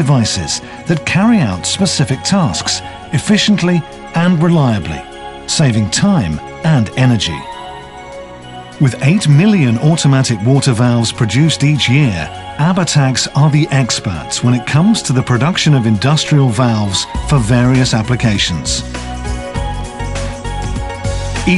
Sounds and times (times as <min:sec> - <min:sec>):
Speech: 0:00.0 - 0:07.5, 0:08.8 - 0:18.8
Music: 0:00.0 - 0:21.5.